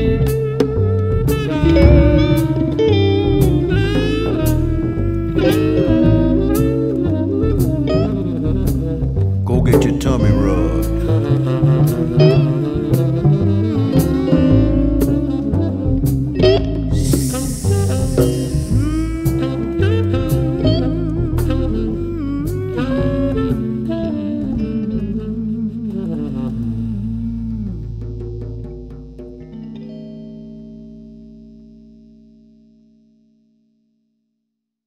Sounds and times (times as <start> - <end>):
Music: 0.0 - 34.6.